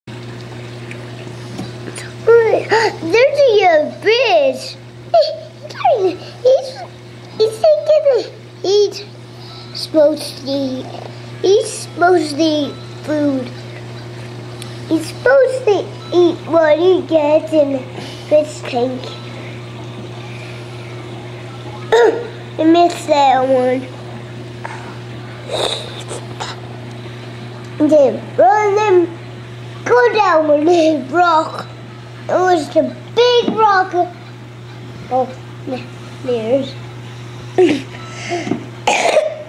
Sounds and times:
Child speech, kid speaking: 0:02.2 - 0:09.1, 0:09.8 - 0:13.6, 0:14.9 - 0:19.1, 0:22.6 - 0:23.9, 0:27.8 - 0:29.2, 0:29.8 - 0:34.2, 0:35.1 - 0:36.8.

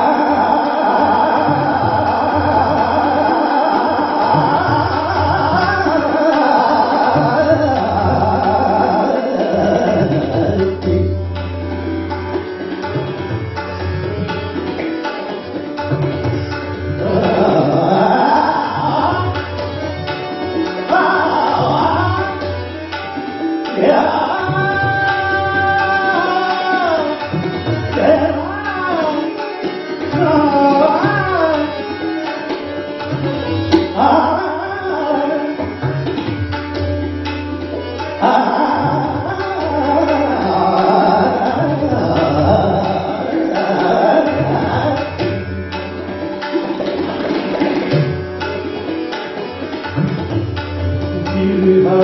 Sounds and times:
Singing: 0:00.0 - 0:11.0, 0:23.7 - 0:29.4, 0:38.2 - 0:45.1
Tabla: 0:00.0 - 0:52.0.

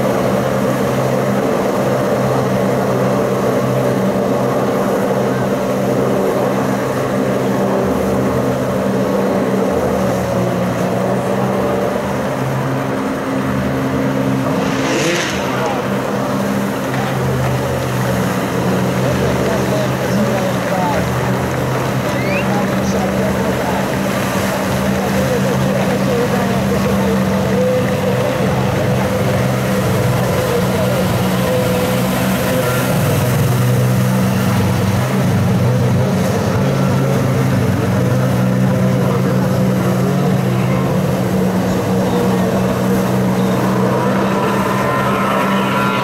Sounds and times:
Waterfall: 0:00.0 - 0:46.0
Speech: 0:15.0 - 0:17.7, 0:18.7 - 0:33.1, 0:34.2 - 0:46.0.

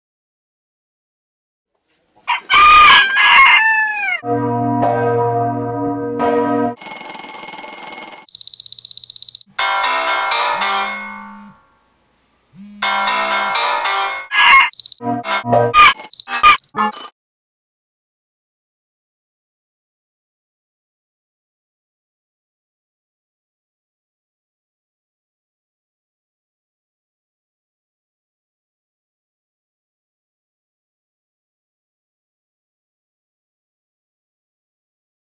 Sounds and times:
Crowing, cock-a-doodle-doo: 0:02.3 - 0:04.2, 0:14.3 - 0:14.7.

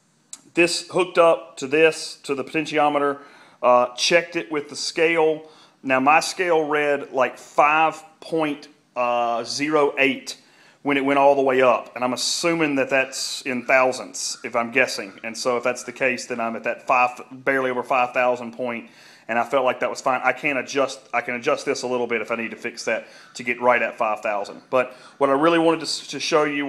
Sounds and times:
Speech: 0:00.4 - 0:26.6.

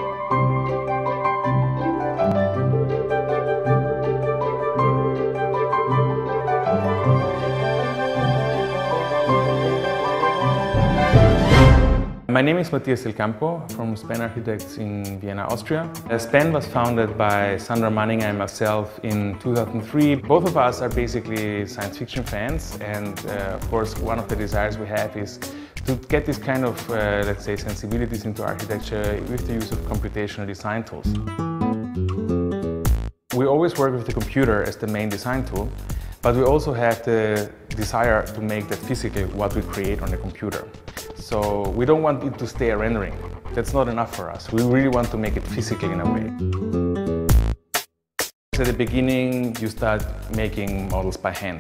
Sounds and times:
Music: 0:00.0 - 0:51.6
Speech: 0:12.3 - 0:31.1, 0:33.3 - 0:46.4, 0:48.6 - 0:51.6.

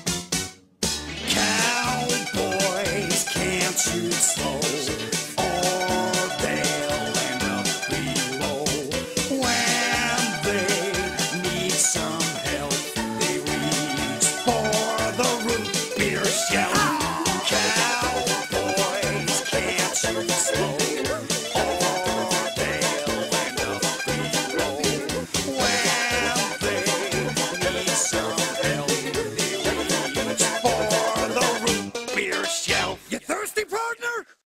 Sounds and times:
Music: 0:00.0 - 0:33.2.

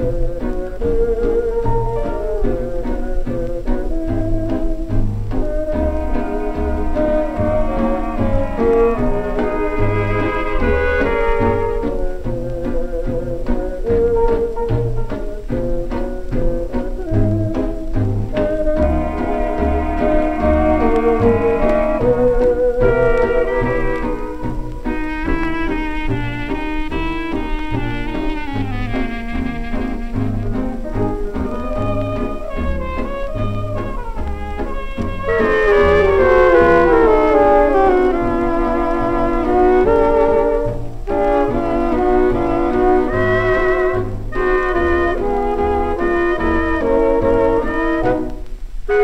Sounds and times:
Orchestra: 0:00.0 - 0:49.0.

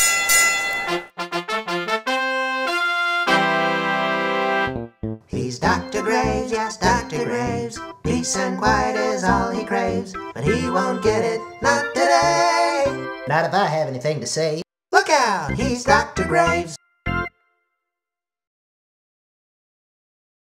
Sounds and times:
Music: 0:00.8 - 0:13.5, 0:15.4 - 0:17.8
Speech: 0:13.3 - 0:16.8.

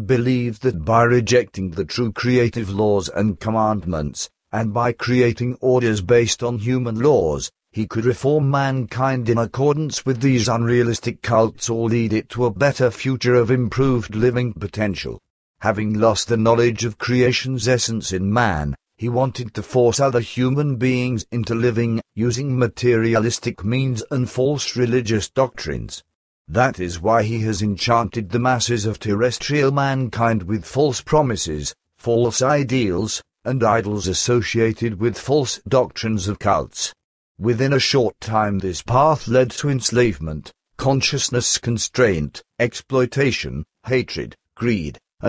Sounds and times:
Speech synthesizer: 0:00.0 - 0:45.2.

